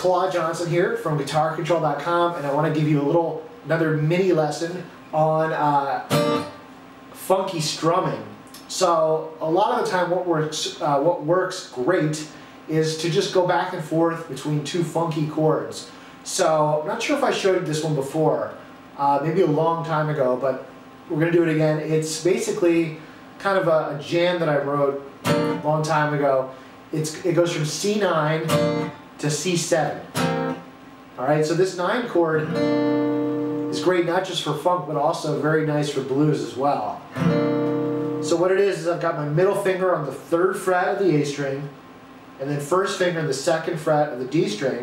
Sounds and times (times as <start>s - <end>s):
Speech: 0.0s - 6.1s, 7.1s - 28.6s, 29.2s - 30.1s, 31.2s - 32.5s, 33.7s - 37.1s, 38.2s - 41.8s, 42.4s - 44.8s
Acoustic guitar: 5.0s - 6.6s, 25.2s - 26.0s, 27.1s - 29.1s, 29.7s - 30.7s, 32.2s - 34.0s, 37.1s - 38.5s
Strum: 25.3s - 26.0s, 28.3s - 29.0s, 37.1s - 38.5s.